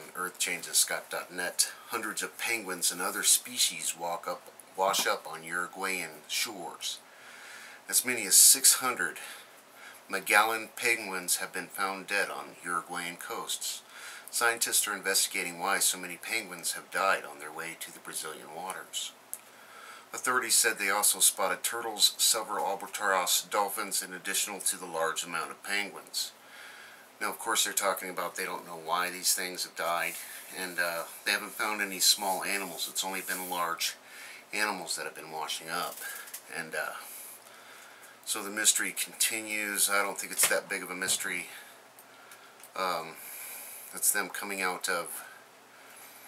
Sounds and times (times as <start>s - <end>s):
Speech: 0.0s - 7.0s, 7.9s - 9.4s, 10.1s - 19.2s, 20.1s - 26.4s, 27.2s - 37.2s, 38.3s - 41.7s, 42.8s - 43.2s, 43.9s - 45.4s.